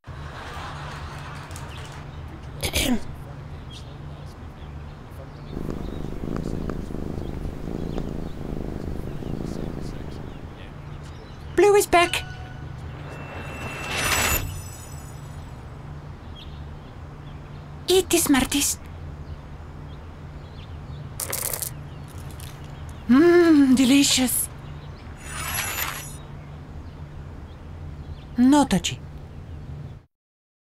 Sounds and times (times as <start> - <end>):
Speech: 2.3 - 5.4, 9.9 - 12.3, 17.9 - 18.8, 23.1 - 24.5, 28.4 - 29.0.